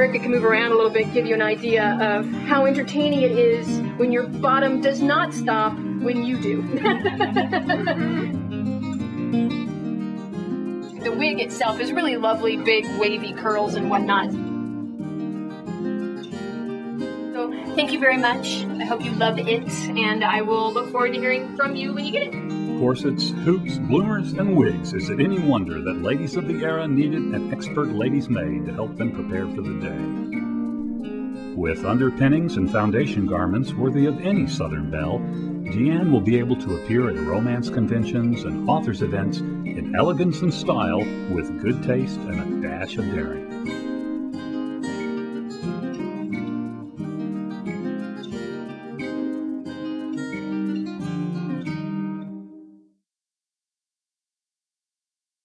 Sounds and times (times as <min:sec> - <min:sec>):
Music: 0:00.0 - 0:53.0
Speech: 0:11.0 - 0:14.3, 0:17.4 - 0:30.0, 0:31.6 - 0:43.4.